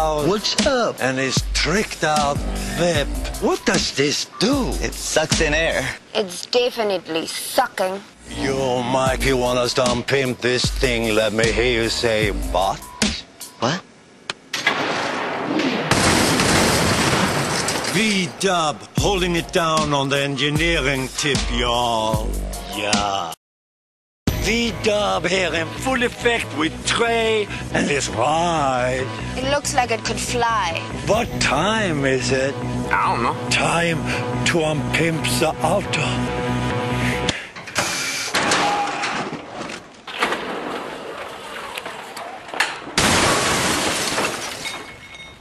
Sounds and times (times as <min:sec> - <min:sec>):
Music: 0:00.0 - 0:06.0, 0:08.3 - 0:13.6, 0:19.0 - 0:23.4, 0:24.3 - 0:37.4
Speech: 0:02.9 - 0:12.8, 0:17.9 - 0:23.4.